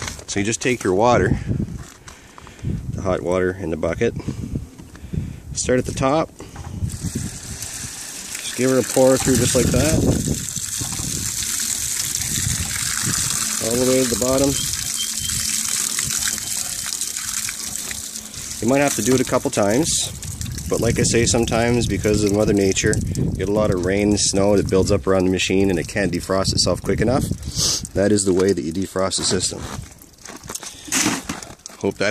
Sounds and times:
Speech: 0.3s - 1.4s, 3.0s - 4.2s, 5.6s - 6.3s, 8.4s - 10.0s, 13.6s - 14.6s, 18.6s - 20.1s, 20.7s - 27.3s, 28.0s - 29.7s, 31.7s - 32.1s
Water: 6.4s - 30.3s.

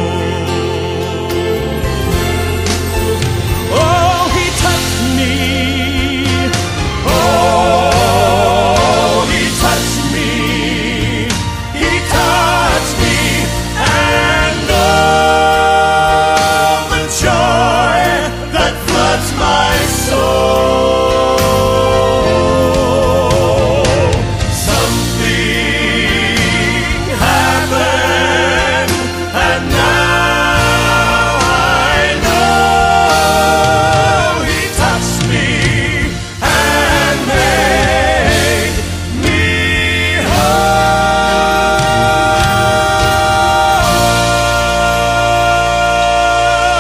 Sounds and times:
Music: 0.0s - 46.8s.

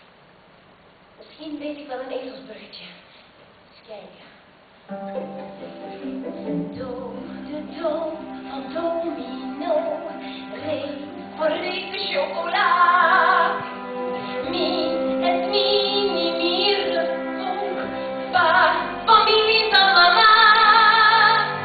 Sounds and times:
Speech: 1.2s - 3.1s, 3.8s - 4.4s
Music: 4.9s - 21.6s.

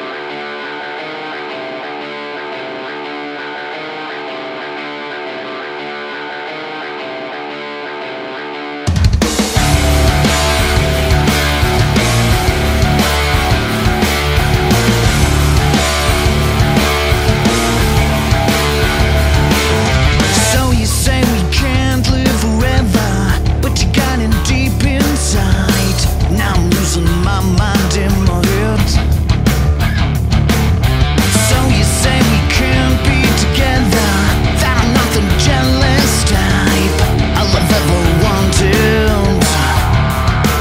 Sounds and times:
Music: 0.0s - 40.6s.

